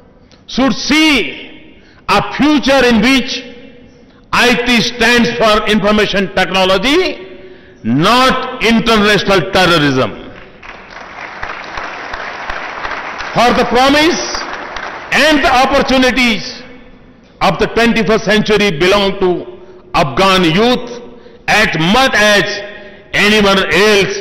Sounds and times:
Narration, monologue: 0.0s - 10.8s, 13.0s - 24.2s
Male speech, man speaking: 0.5s - 1.5s, 2.1s - 3.6s, 4.4s - 7.2s, 7.9s - 10.2s, 13.4s - 14.4s, 15.1s - 16.7s, 17.4s - 24.2s.

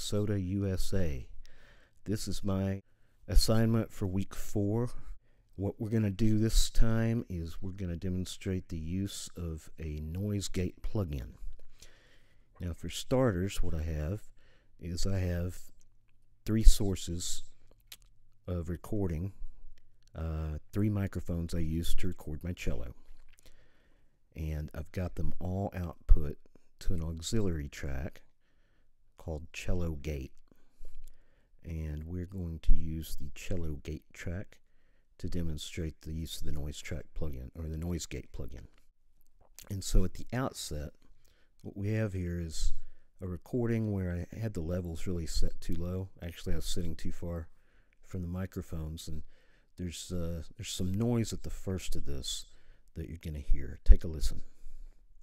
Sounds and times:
Speech: 0.0s - 1.4s, 2.0s - 11.5s, 12.6s - 15.8s, 16.4s - 17.6s, 18.4s - 19.5s, 20.1s - 23.1s, 24.3s - 28.3s, 29.2s - 30.4s, 31.6s - 34.6s, 35.2s - 38.8s, 39.6s - 54.6s.

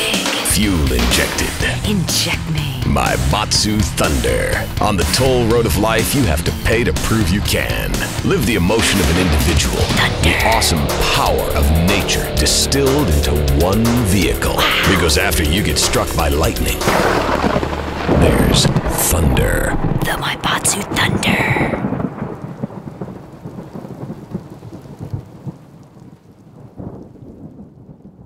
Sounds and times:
Speech: 0.0s - 17.0s, 18.1s - 21.8s
Music: 0.0s - 19.1s.

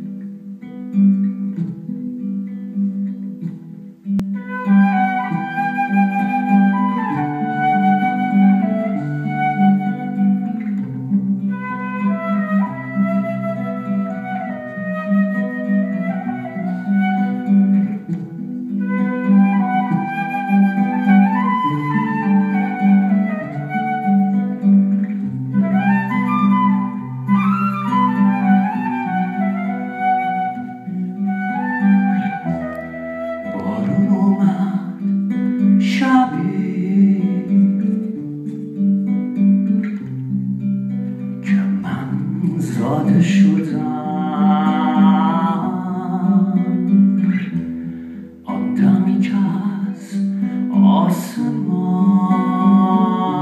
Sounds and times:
Acoustic guitar: 0.0s - 53.4s.

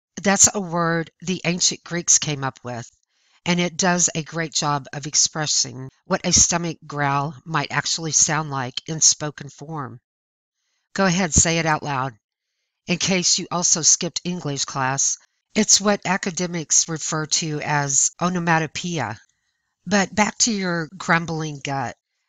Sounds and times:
Speech: 0.2s - 2.9s, 3.5s - 10.0s, 11.0s - 12.2s, 12.9s - 19.2s, 19.9s - 22.0s.

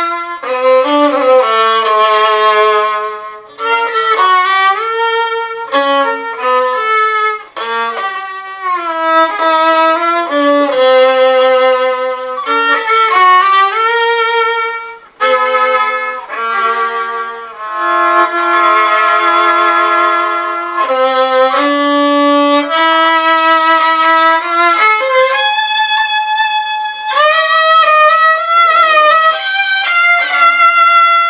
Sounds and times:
Violin, fiddle: 0.0s - 31.2s.

